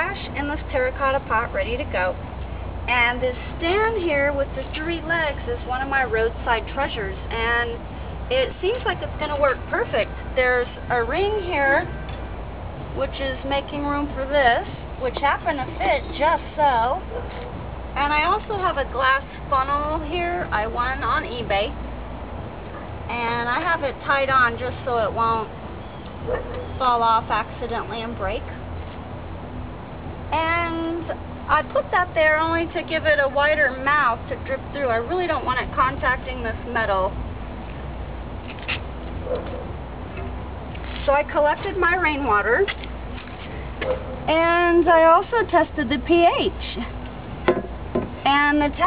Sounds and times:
Speech: 0:18.0 - 0:21.7, 0:23.1 - 0:25.5, 0:26.8 - 0:28.5, 0:30.3 - 0:37.1, 0:44.3 - 0:46.9, 0:48.2 - 0:48.8.

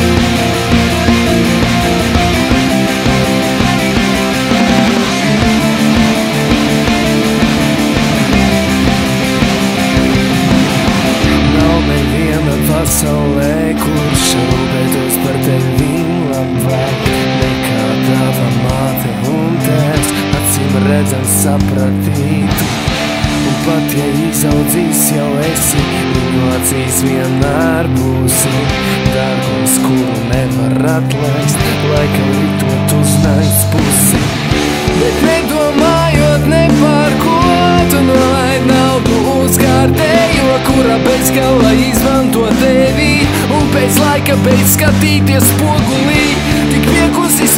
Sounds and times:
Exciting music: 0:00.0 - 0:16.0, 0:31.4 - 0:47.5.

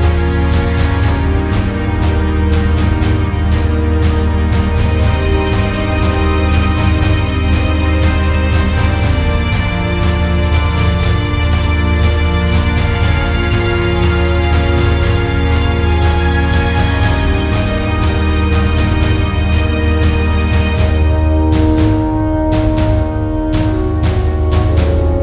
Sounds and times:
Music: 0:00.0 - 0:25.2.

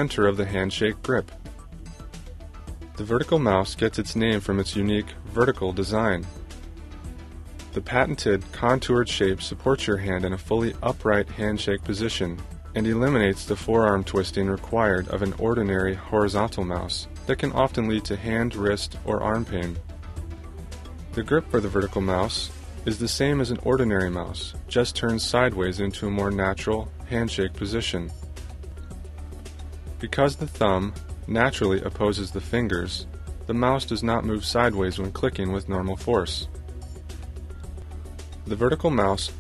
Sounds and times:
Speech: 0:00.0 - 0:01.3, 0:03.0 - 0:06.4, 0:07.8 - 0:19.8, 0:21.1 - 0:28.1, 0:30.0 - 0:36.5, 0:38.5 - 0:39.4
Music: 0:00.0 - 0:39.4.

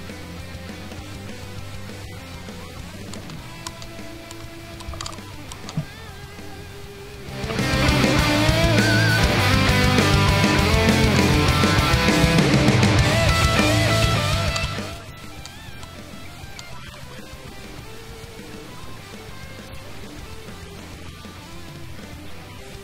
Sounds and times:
Music: 0:00.0 - 0:22.8.

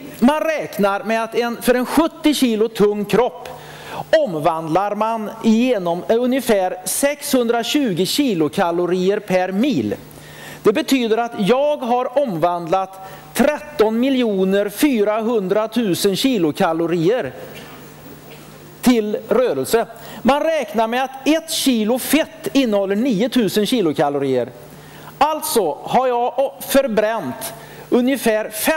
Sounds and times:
Speech: 0:00.0 - 0:03.5, 0:04.1 - 0:10.0, 0:10.6 - 0:17.4, 0:18.8 - 0:24.6, 0:25.2 - 0:28.7.

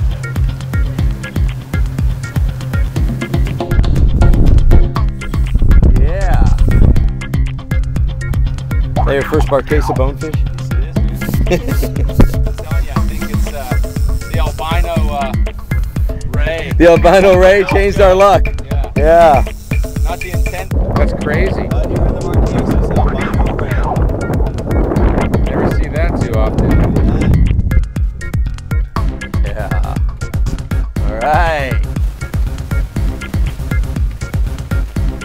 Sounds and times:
Music: 0:00.0 - 0:35.2
Speech: 0:09.0 - 0:11.1, 0:12.6 - 0:15.4, 0:16.3 - 0:19.5, 0:20.1 - 0:23.9, 0:25.5 - 0:27.3.

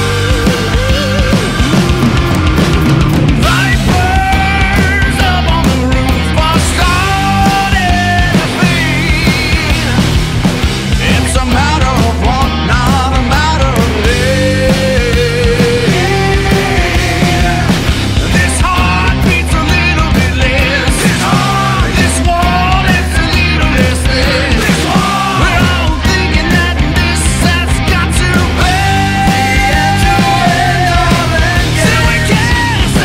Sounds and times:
Dance music: 0:00.0 - 0:33.0.

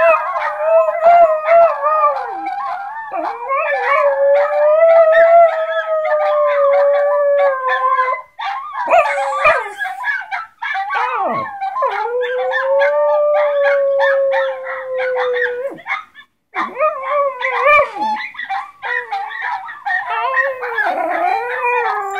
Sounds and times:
Howl: 0:00.0 - 0:16.0, 0:16.6 - 0:22.1.

